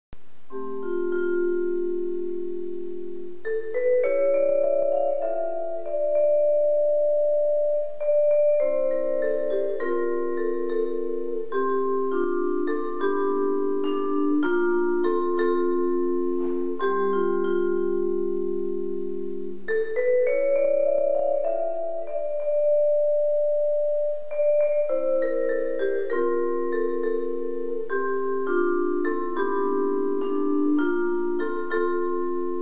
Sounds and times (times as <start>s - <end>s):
Vibraphone: 0.5s - 32.6s.